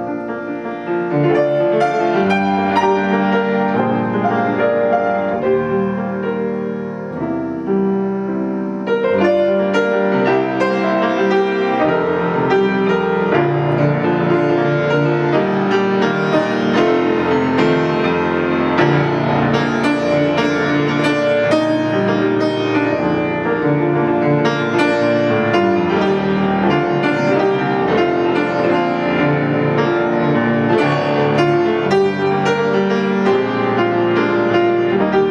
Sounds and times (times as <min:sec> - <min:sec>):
Music: 0:00.0 - 0:35.3.